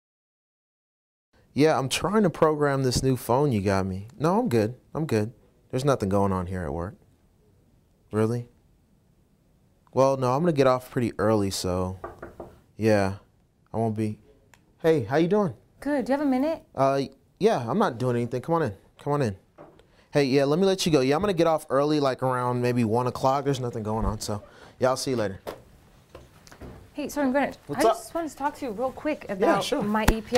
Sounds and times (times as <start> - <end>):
Conversation: 1.4 - 30.3
Female speech, woman speaking: 15.8 - 16.7, 27.0 - 30.3.